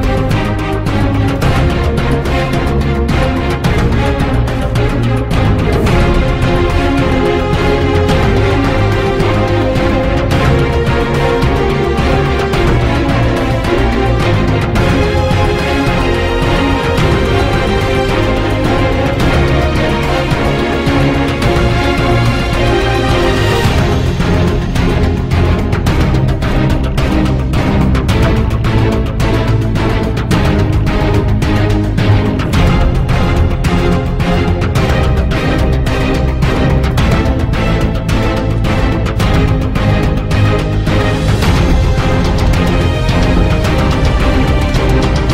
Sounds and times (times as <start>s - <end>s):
Music: 0.0s - 45.3s.